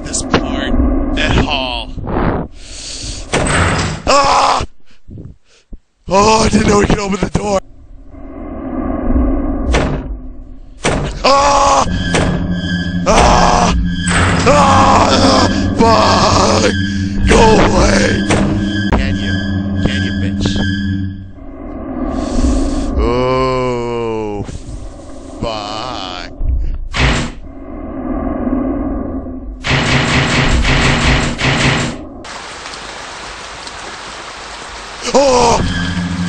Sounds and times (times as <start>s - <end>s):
Speech: 0.0s - 2.0s, 6.1s - 7.6s, 17.3s - 18.2s, 19.0s - 20.6s, 23.0s - 24.5s, 25.4s - 26.3s.